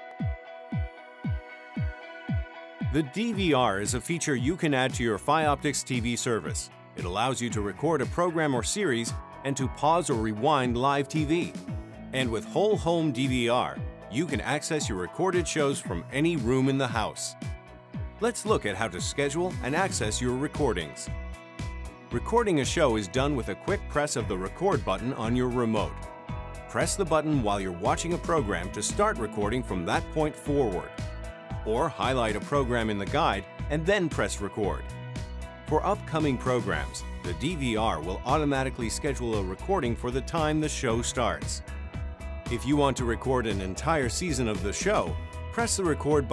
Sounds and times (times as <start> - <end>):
Music: 0.0 - 46.3
Speech: 2.9 - 11.6, 12.2 - 17.4, 18.2 - 21.1, 22.2 - 26.0, 26.7 - 30.9, 31.7 - 34.8, 35.7 - 41.6, 42.5 - 46.3.